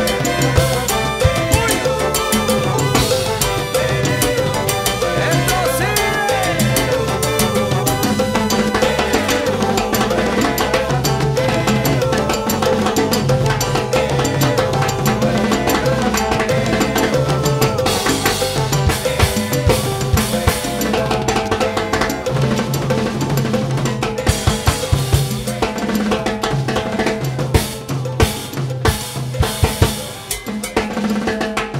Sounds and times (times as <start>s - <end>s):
Salsa music: 0.0s - 31.7s.